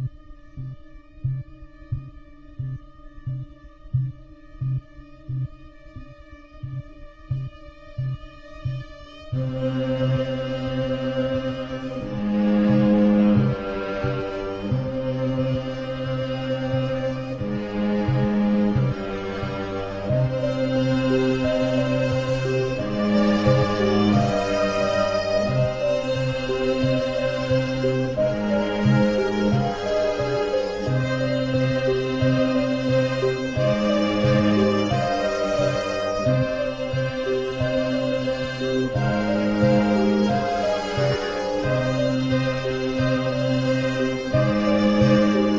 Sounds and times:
Music: 0:00.0 - 0:45.5.

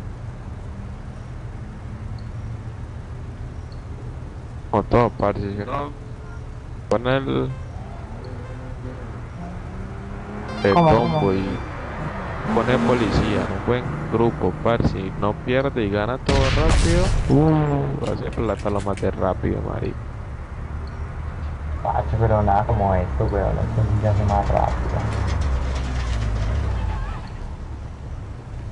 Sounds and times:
Speech: 0:04.8 - 0:06.0, 0:06.9 - 0:07.6, 0:10.6 - 0:11.6, 0:12.5 - 0:20.0, 0:21.9 - 0:25.1.

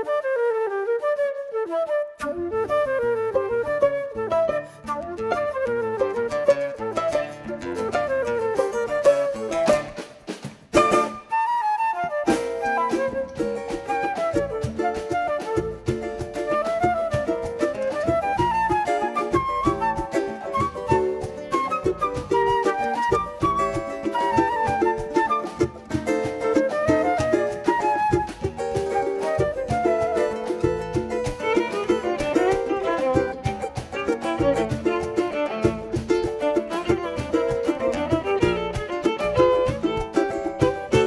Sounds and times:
Middle Eastern music: 0:02.2 - 0:41.0
Soul music: 0:02.2 - 0:41.0.

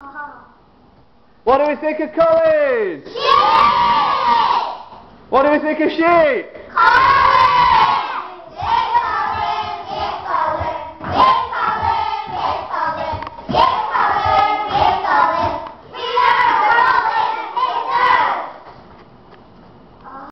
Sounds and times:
Child singing: 0:06.8 - 0:18.4.

